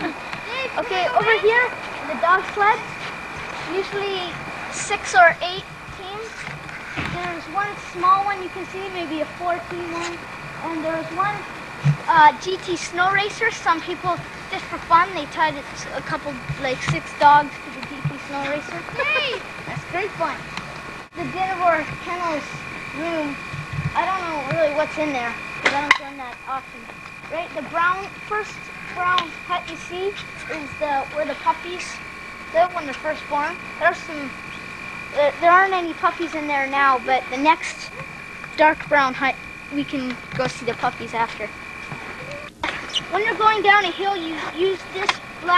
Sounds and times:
Speech: 0.0 - 2.8, 3.7 - 6.4, 7.1 - 11.4, 12.1 - 20.4, 21.2 - 23.4, 24.0 - 32.0, 32.6 - 34.4, 35.2 - 38.0, 38.6 - 41.5, 43.1 - 45.5.

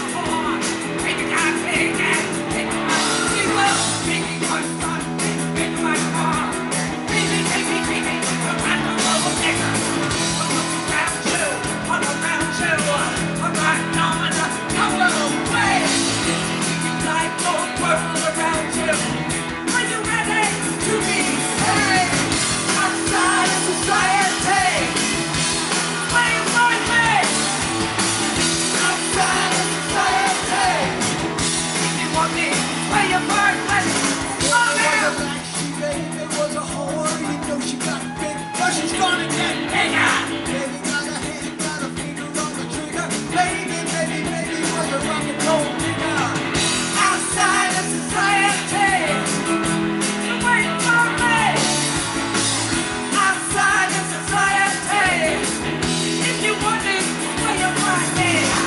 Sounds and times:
Rock and roll: 0.0 - 58.6.

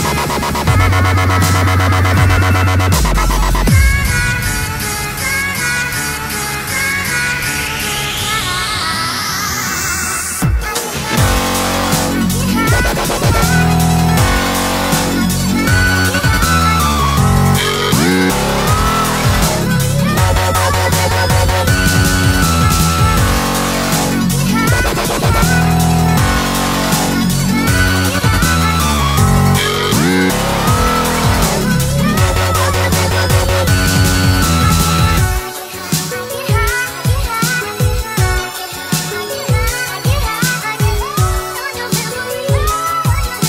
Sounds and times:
Dubstep: 0.0 - 43.4.

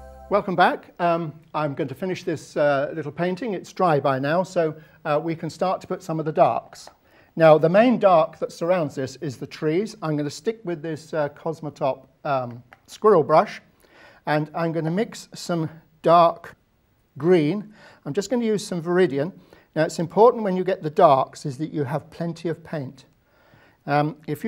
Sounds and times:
Speech: 0.3 - 13.7, 14.3 - 16.6, 17.2 - 23.1, 23.8 - 24.4.

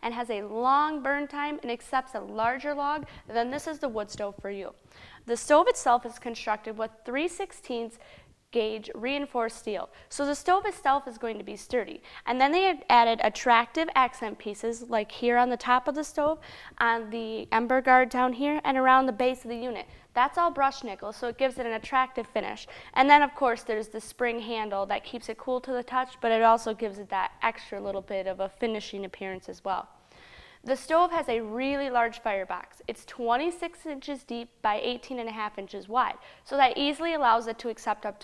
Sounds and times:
Speech: 0.0 - 29.9, 30.7 - 38.2.

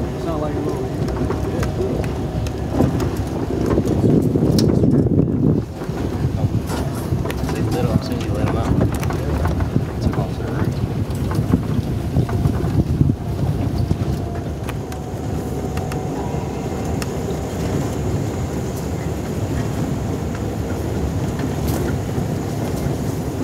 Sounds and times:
Outside, rural or natural: 0.0 - 23.4.

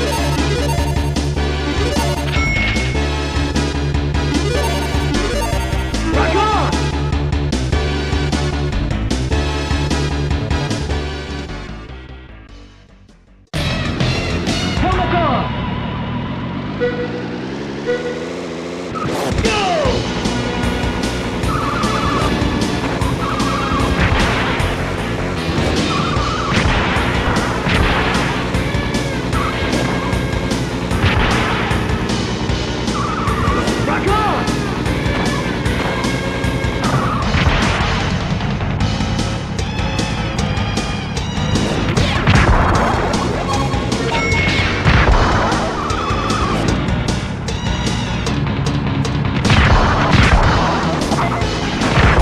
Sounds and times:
Music: 0.0 - 15.8, 19.2 - 52.2
Speech: 6.1 - 6.8, 14.8 - 15.5, 19.4 - 20.0, 33.8 - 34.6.

